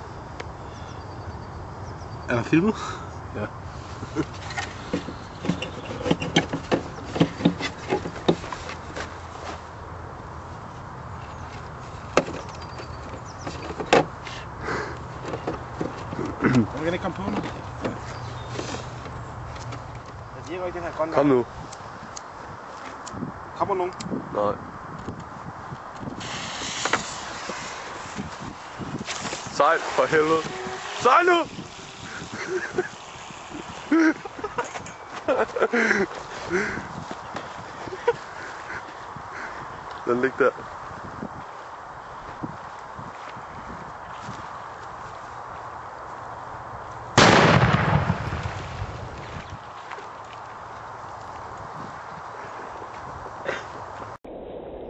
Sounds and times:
Speech: 0:16.6 - 0:17.4, 0:20.4 - 0:21.5, 0:29.5 - 0:31.5, 0:40.0 - 0:40.6.

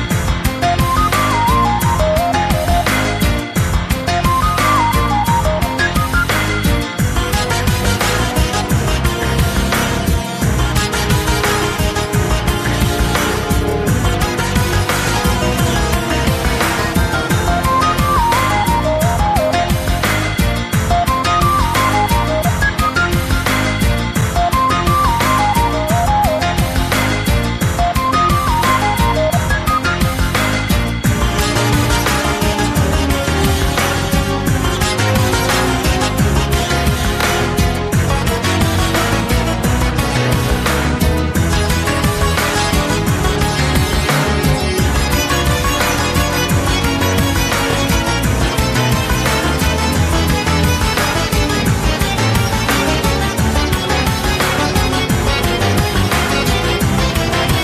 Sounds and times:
Rhythm and blues: 0:00.0 - 0:57.6.

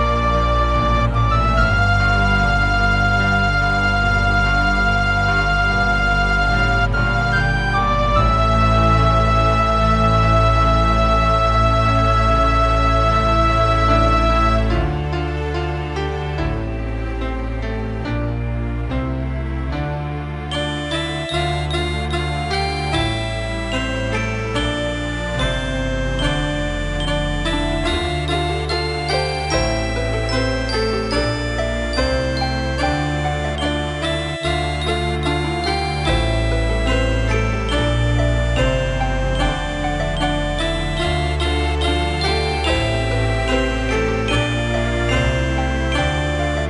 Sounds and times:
Background music: 0:00.0 - 0:46.7
Soundtrack music: 0:00.0 - 0:46.7.

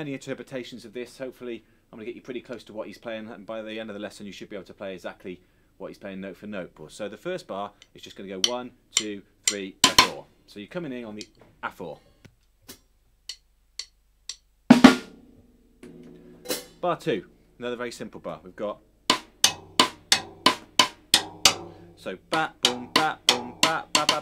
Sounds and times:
Speech: 0:00.0 - 0:12.1, 0:16.8 - 0:18.8, 0:22.0 - 0:22.5.

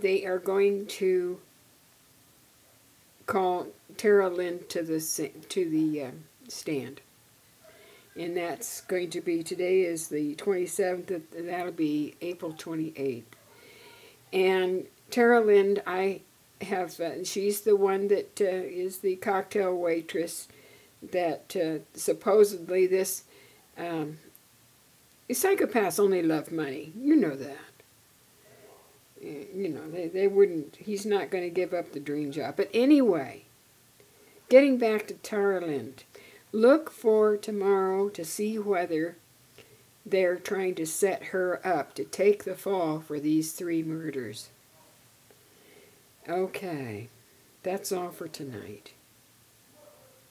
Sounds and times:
Speech: 0:00.0 - 0:01.5, 0:03.3 - 0:07.0, 0:08.2 - 0:13.3, 0:14.3 - 0:23.2, 0:23.8 - 0:24.3, 0:25.3 - 0:27.8, 0:29.2 - 0:33.5, 0:34.5 - 0:36.0, 0:36.6 - 0:39.2, 0:40.1 - 0:44.6, 0:46.3 - 0:49.0
Inside, small room: 0:00.0 - 0:50.3.

